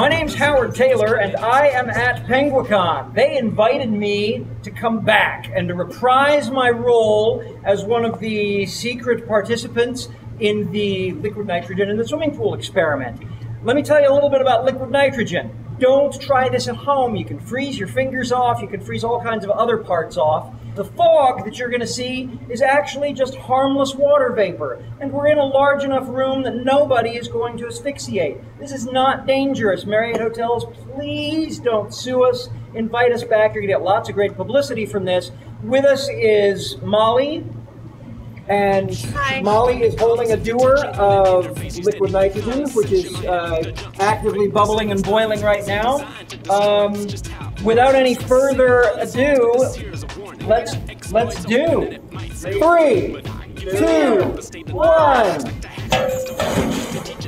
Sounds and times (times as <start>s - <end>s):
Speech: 0.0s - 37.5s, 38.4s - 56.0s.